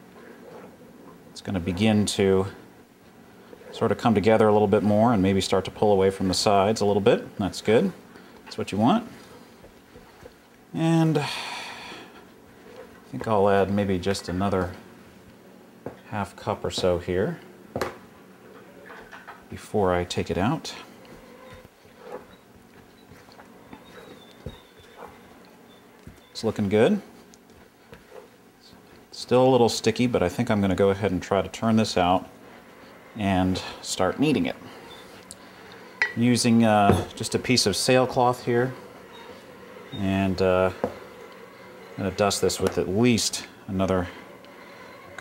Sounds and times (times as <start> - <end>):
Speech: 1.4 - 2.6, 3.7 - 9.2, 10.8 - 11.3, 13.1 - 14.8, 16.1 - 17.4, 19.5 - 20.9, 26.4 - 27.1, 28.7 - 32.3, 33.2 - 34.6, 36.2 - 38.8, 39.9 - 40.8, 42.0 - 44.2.